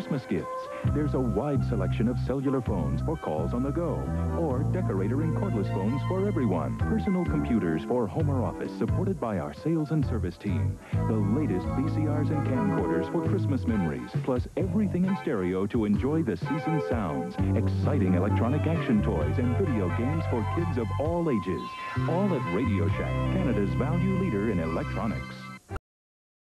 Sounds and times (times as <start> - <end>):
Speech: 0.0 - 25.5
Music: 0.0 - 25.8.